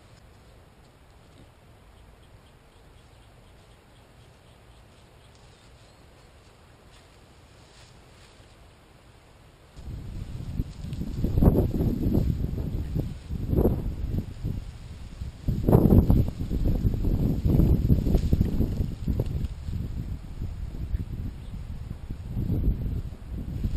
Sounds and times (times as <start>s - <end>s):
Outside, rural or natural: 0.0s - 23.7s.